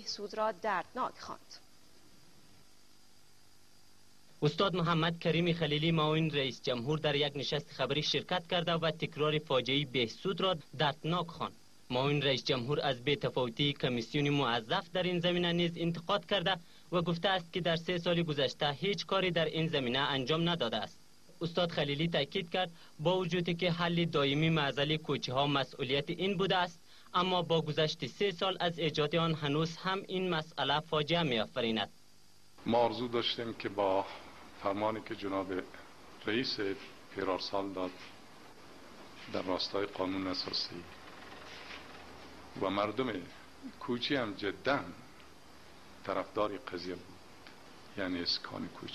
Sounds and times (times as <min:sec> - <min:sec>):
Male speech, man speaking: 0:04.4 - 0:31.9, 0:32.6 - 0:38.1, 0:39.3 - 0:41.0, 0:42.6 - 0:45.0, 0:46.0 - 0:47.1, 0:48.0 - 0:48.9.